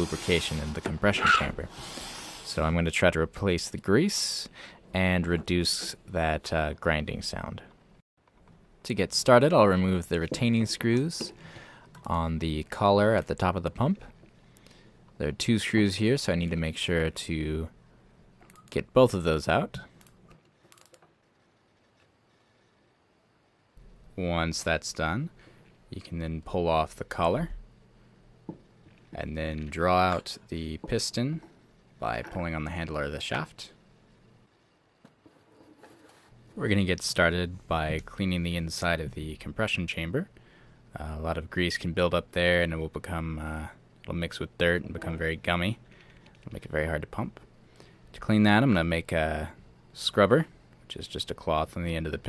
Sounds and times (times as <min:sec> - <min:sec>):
Speech: 0:00.0 - 0:01.8, 0:02.5 - 0:07.7, 0:08.8 - 0:11.4, 0:12.0 - 0:14.2, 0:15.2 - 0:17.8, 0:18.7 - 0:19.9, 0:24.2 - 0:27.6, 0:29.1 - 0:33.8, 0:36.6 - 0:40.3, 0:40.9 - 0:45.8, 0:46.4 - 0:47.4, 0:48.1 - 0:52.2.